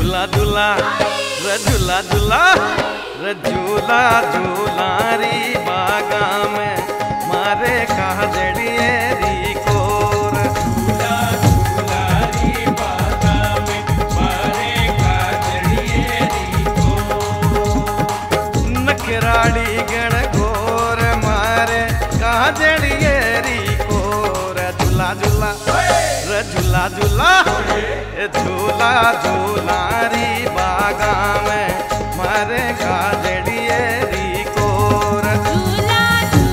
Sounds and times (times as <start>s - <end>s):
Folk music: 0.0s - 36.5s
Singing: 0.0s - 36.5s
Song: 0.0s - 36.5s.